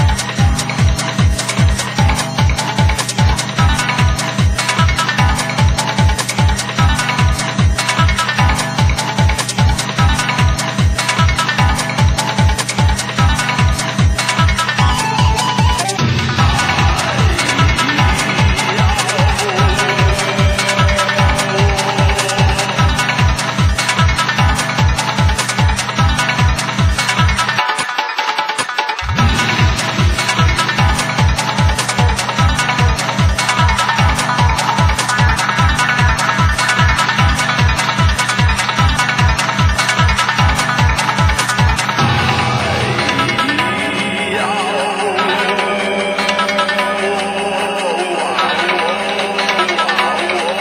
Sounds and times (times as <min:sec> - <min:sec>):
Dance music: 0:00.0 - 0:27.8, 0:29.0 - 0:50.6.